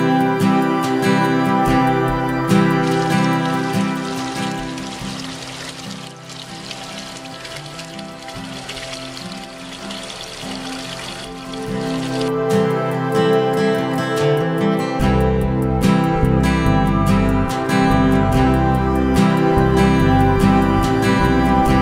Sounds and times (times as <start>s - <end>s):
Stream: 0.0s - 14.7s
Music: 0.0s - 21.8s.